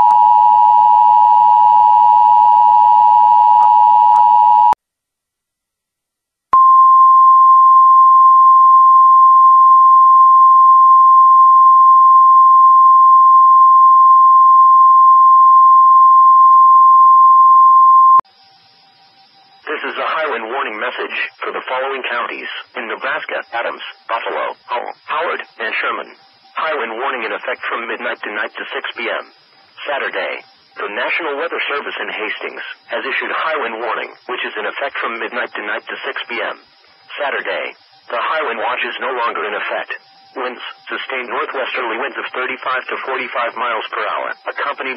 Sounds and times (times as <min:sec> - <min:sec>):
Speech: 0:19.7 - 0:44.9.